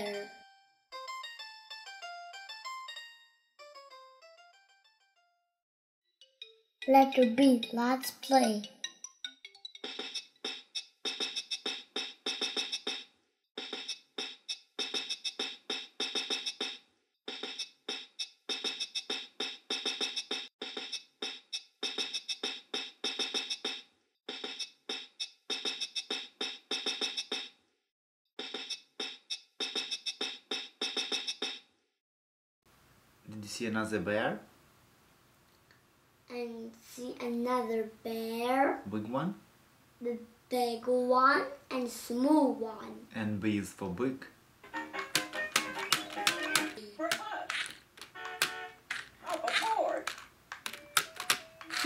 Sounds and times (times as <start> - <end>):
Music: 0.0 - 5.6, 6.2 - 10.2, 44.6 - 46.9.